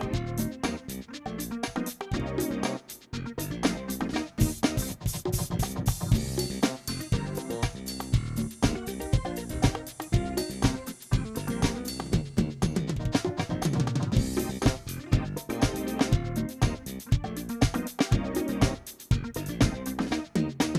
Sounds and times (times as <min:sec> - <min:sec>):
Drum: 0:00.0 - 0:20.7
Drum kit: 0:00.0 - 0:20.7.